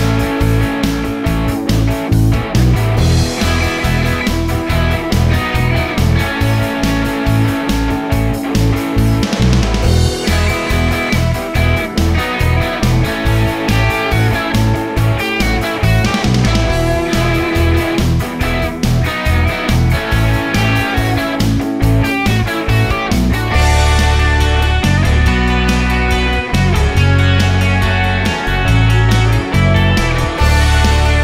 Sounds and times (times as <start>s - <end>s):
Music: 0.0s - 31.2s.